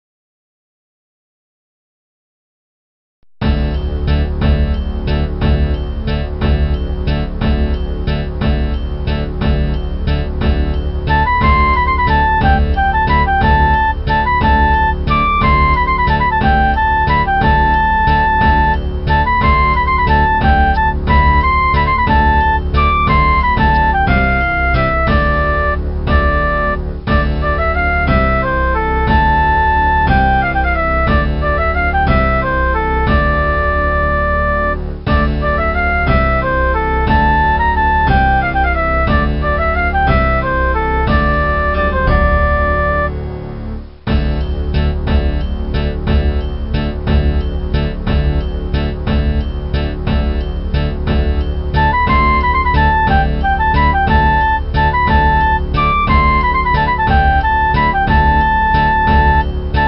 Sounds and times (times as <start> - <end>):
Music: 3.4 - 59.8.